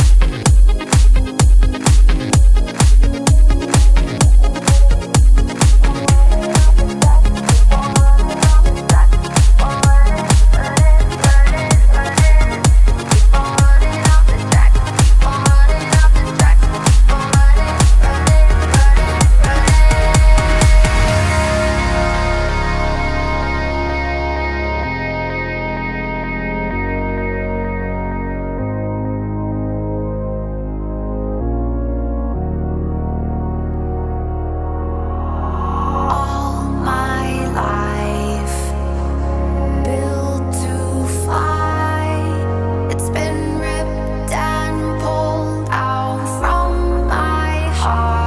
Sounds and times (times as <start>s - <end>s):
Music: 0.0s - 48.2s.